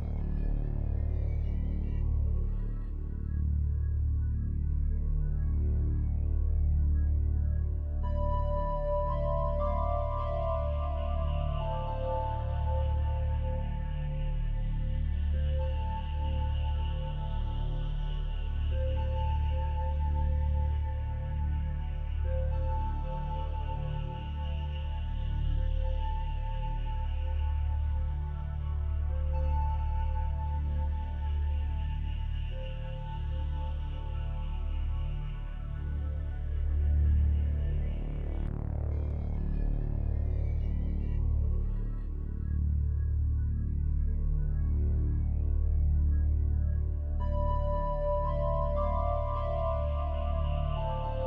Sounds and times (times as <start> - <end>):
Music: 0.0 - 51.2.